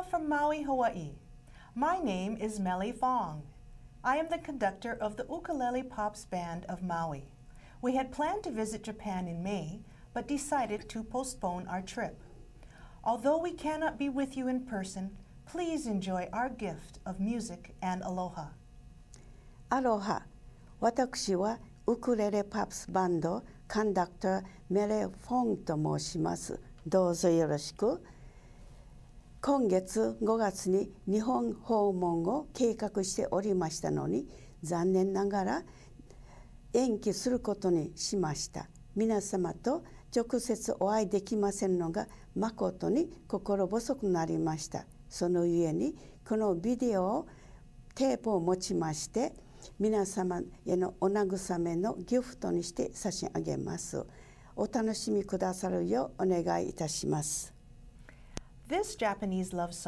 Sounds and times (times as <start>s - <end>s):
Speech: 0.0s - 1.2s, 1.8s - 12.3s, 13.0s - 18.6s, 19.7s - 28.1s, 29.4s - 35.7s, 36.8s - 47.3s, 47.9s - 57.6s, 58.7s - 59.8s.